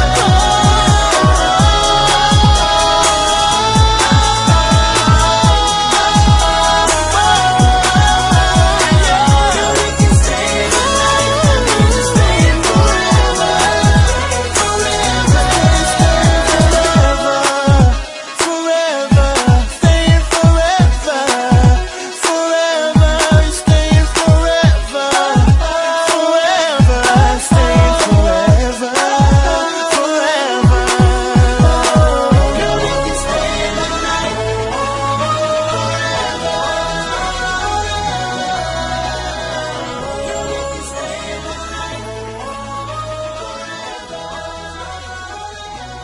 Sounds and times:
Rhythm and blues: 0.0s - 46.0s.

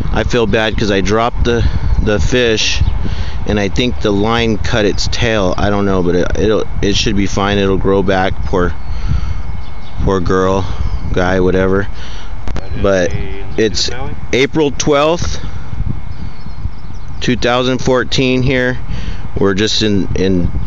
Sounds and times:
Speech: 0.1s - 2.8s, 3.5s - 8.8s, 10.1s - 11.9s, 12.6s - 15.4s, 17.2s - 18.8s, 19.4s - 20.5s.

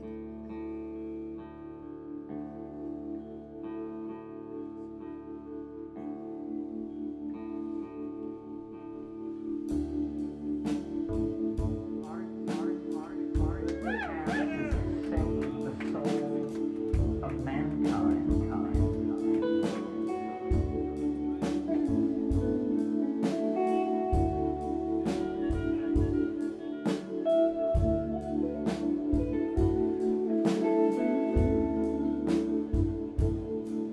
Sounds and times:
Guitar: 0.0s - 33.9s
Speech: 11.7s - 20.1s.

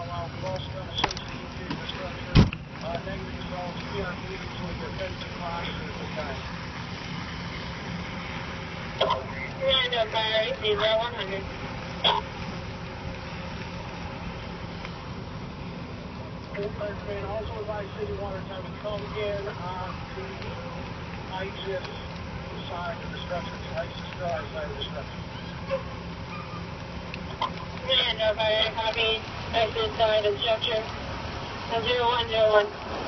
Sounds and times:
Speech: 0.0s - 6.4s, 16.6s - 25.1s, 27.8s - 30.9s, 31.7s - 32.8s.

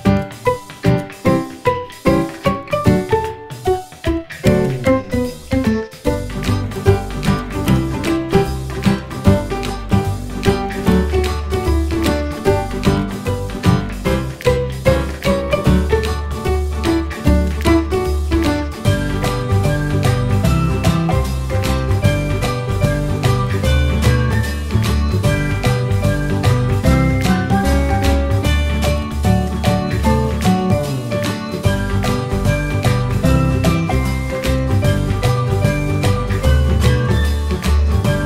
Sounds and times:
Music: 0.0s - 38.2s.

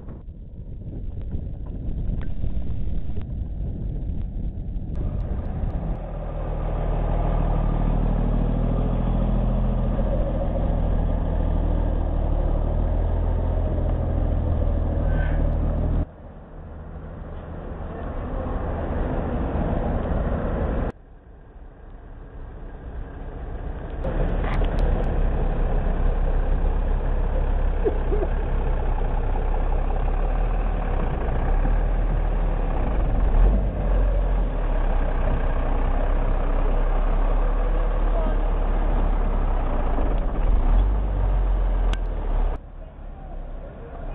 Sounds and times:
Truck: 0.0s - 44.1s
Idling: 1.5s - 33.4s, 34.0s - 44.1s.

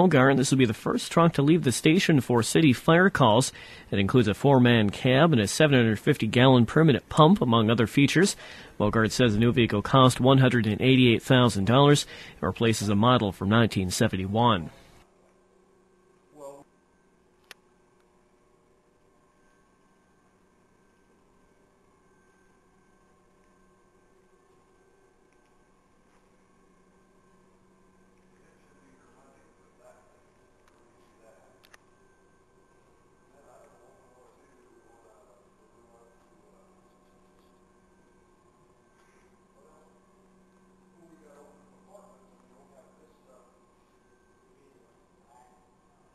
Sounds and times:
Speech: 0.0s - 14.8s, 28.4s - 30.3s, 31.0s - 31.7s, 33.3s - 37.0s, 41.0s - 43.6s.

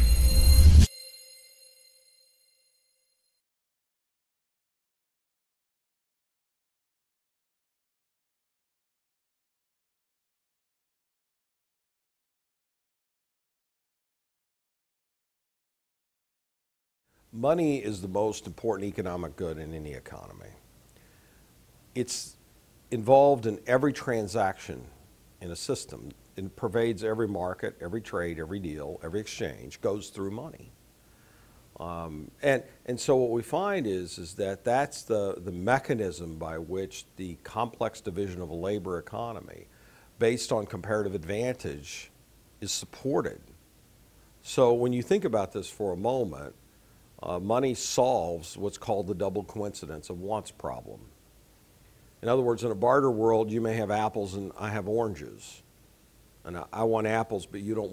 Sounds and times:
Speech: 17.4s - 20.6s, 22.0s - 30.8s, 31.8s - 43.6s, 44.4s - 46.6s, 47.2s - 51.1s, 52.2s - 55.6s, 56.4s - 57.9s.

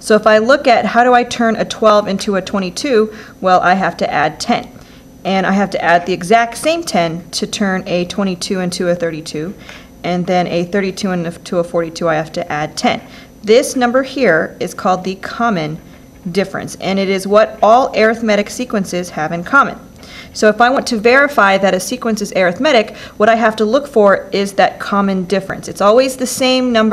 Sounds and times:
Speech: 0.0s - 26.9s.

